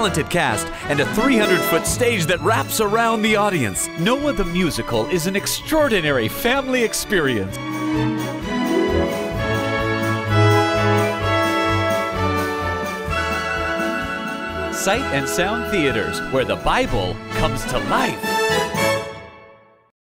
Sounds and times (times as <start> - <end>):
Speech: 0.0 - 7.6, 14.8 - 18.3
Music: 0.0 - 19.9.